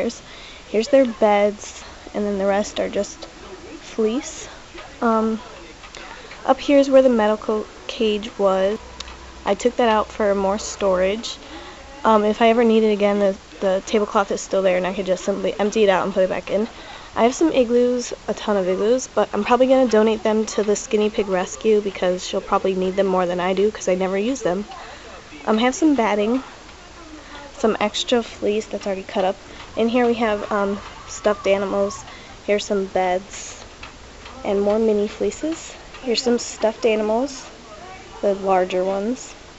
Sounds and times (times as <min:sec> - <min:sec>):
Speech: 0:00.0 - 0:08.8, 0:09.4 - 0:33.6, 0:34.3 - 0:39.4.